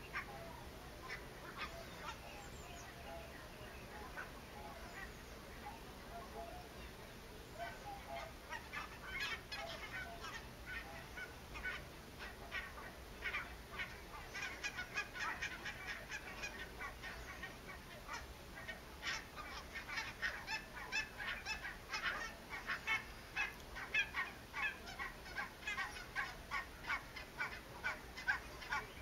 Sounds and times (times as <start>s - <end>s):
Honk: 0.0s - 6.9s, 7.6s - 29.0s.